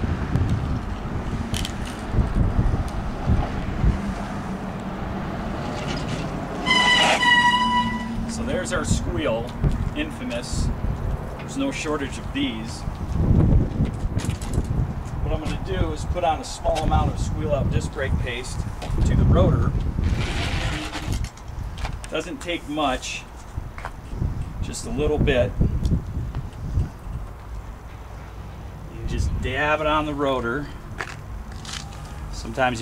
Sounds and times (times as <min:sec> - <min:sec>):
Speech: 0:08.3 - 0:10.7, 0:11.5 - 0:12.9, 0:15.2 - 0:19.8, 0:22.1 - 0:23.3, 0:24.6 - 0:25.6, 0:28.9 - 0:30.8, 0:32.3 - 0:32.8.